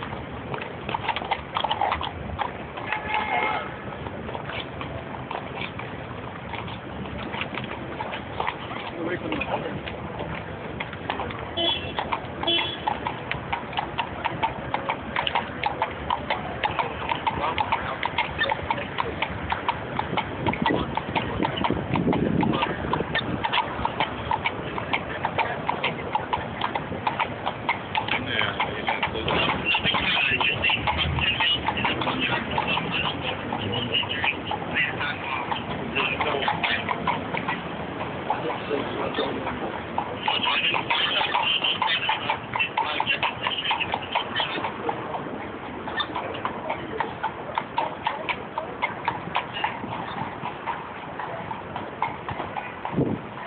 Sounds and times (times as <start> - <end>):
Clip-clop: 0.0 - 53.4
Speech: 8.9 - 9.8, 28.1 - 37.0, 38.4 - 39.6, 40.2 - 44.7.